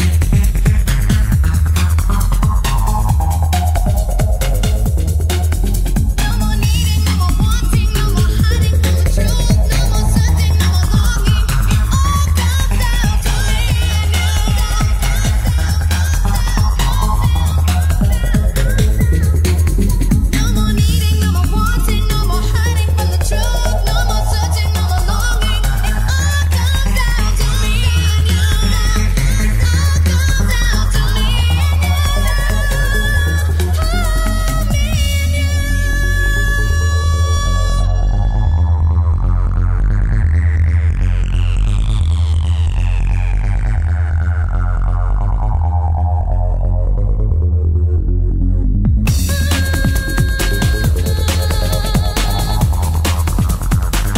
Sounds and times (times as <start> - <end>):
Trance music: 0.0 - 54.1.